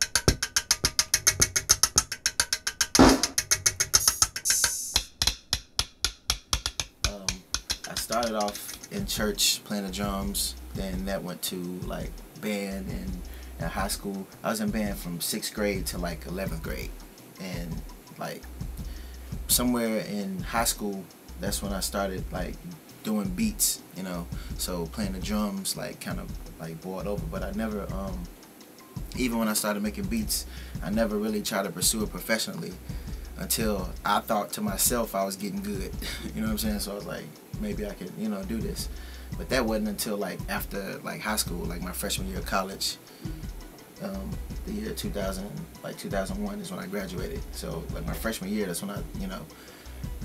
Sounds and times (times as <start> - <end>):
Speech: 7.1 - 18.5, 19.5 - 28.3, 29.2 - 32.8, 33.4 - 43.0, 44.0 - 49.5.